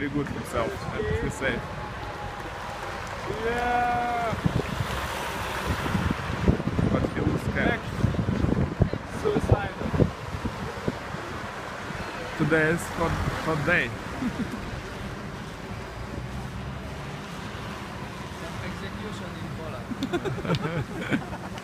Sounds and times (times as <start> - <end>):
Traffic noise, roadway noise: 0.0 - 21.6.